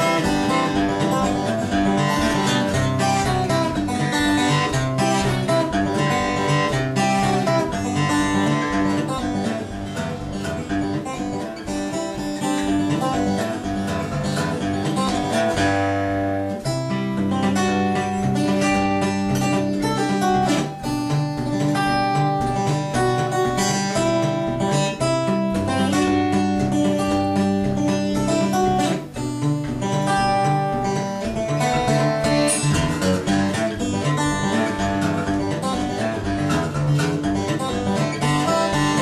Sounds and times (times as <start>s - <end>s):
Strum: 0.0s - 39.0s.